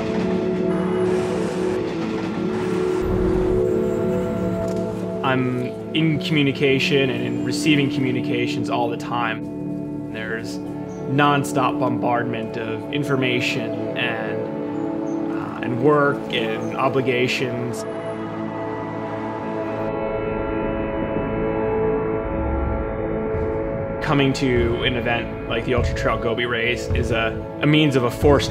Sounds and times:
Music: 0:00.0 - 0:28.5
Speech: 0:05.2 - 0:09.4, 0:10.2 - 0:14.5, 0:15.3 - 0:17.8, 0:24.0 - 0:28.5.

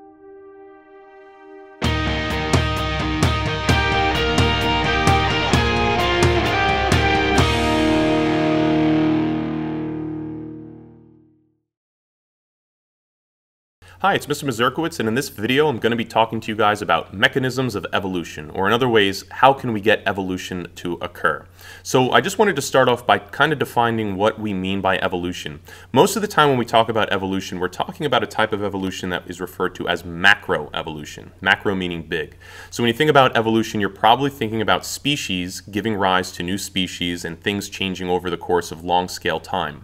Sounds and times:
Speech: 0:14.0 - 0:39.8.

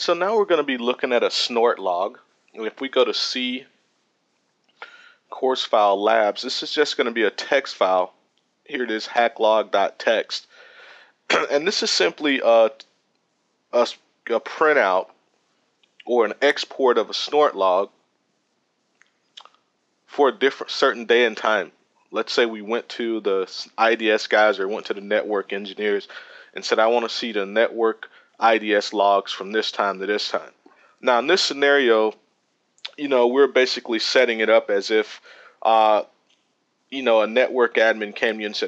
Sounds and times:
Speech: 0:00.0 - 0:03.7, 0:05.3 - 0:08.1, 0:08.7 - 0:10.5, 0:11.3 - 0:12.8, 0:13.8 - 0:15.1, 0:16.0 - 0:17.9, 0:20.1 - 0:32.2, 0:32.9 - 0:36.1, 0:36.9 - 0:38.6.

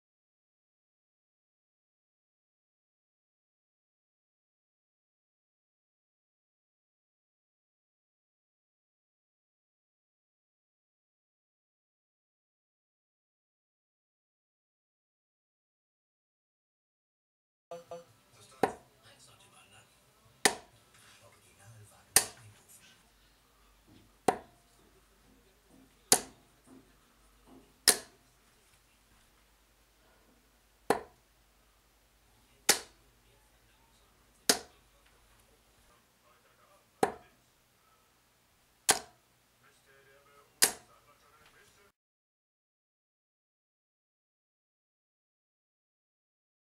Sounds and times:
Inside, small room: 0:17.7 - 0:42.0.

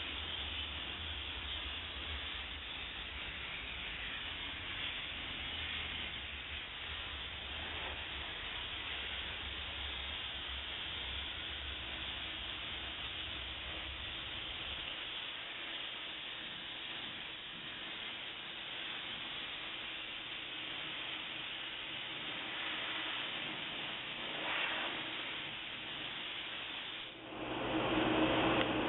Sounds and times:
Hiss: 0:00.0 - 0:28.8.

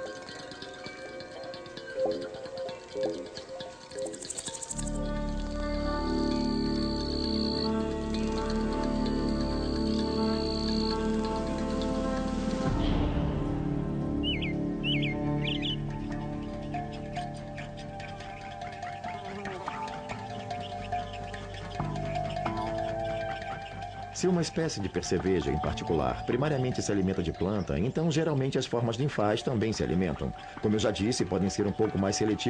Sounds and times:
Insect: 0:00.0 - 0:13.1
Music: 0:00.0 - 0:32.5.

